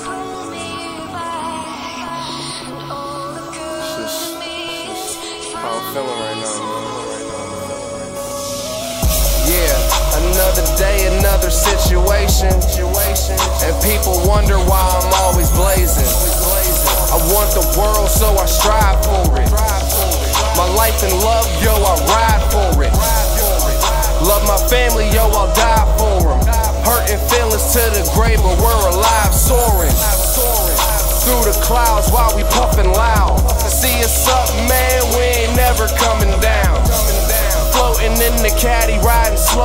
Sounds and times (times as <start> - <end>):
Music: 0.0 - 39.6.